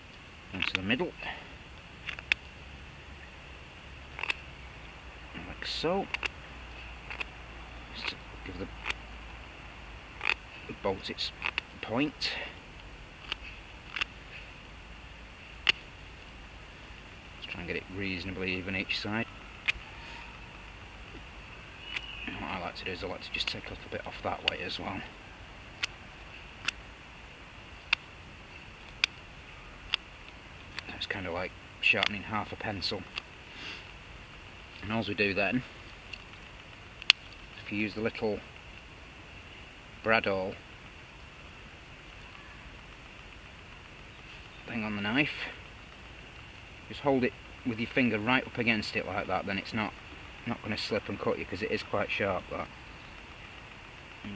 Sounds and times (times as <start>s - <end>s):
Speech: 0.6s - 1.4s, 5.4s - 6.2s, 8.0s - 8.7s, 10.7s - 12.6s, 17.4s - 19.3s, 22.3s - 25.1s, 30.9s - 33.1s, 34.8s - 35.7s, 37.6s - 38.4s, 40.0s - 40.6s, 44.7s - 45.6s, 46.9s - 52.7s.